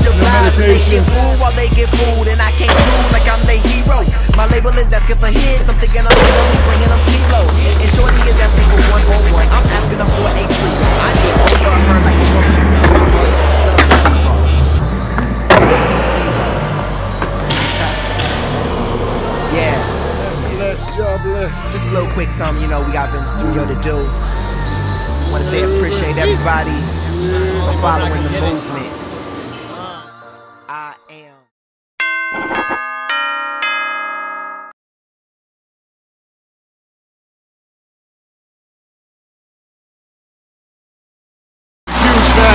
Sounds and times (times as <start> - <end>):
Music: 0.0 - 31.5, 41.9 - 42.5
Speech: 19.5 - 24.2, 25.3 - 28.9, 30.7 - 31.5.